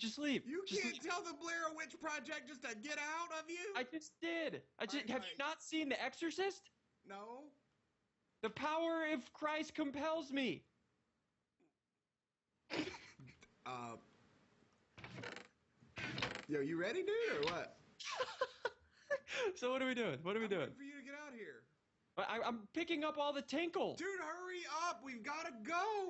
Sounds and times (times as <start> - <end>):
Speech: 0.0 - 7.5, 8.4 - 10.6, 13.7 - 14.0, 16.5 - 18.3, 19.3 - 21.6, 22.2 - 26.0.